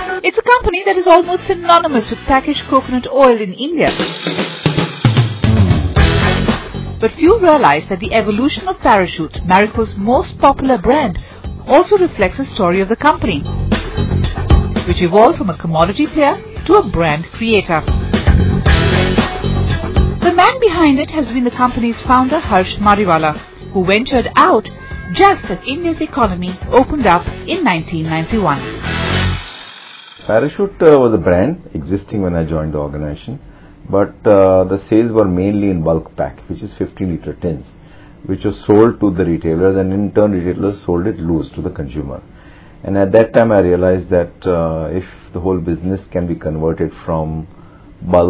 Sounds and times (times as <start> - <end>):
Speech: 0.0 - 3.9, 7.0 - 13.5, 14.9 - 17.8, 20.2 - 28.6, 30.3 - 37.7, 42.8 - 48.2
Music: 0.0 - 30.8.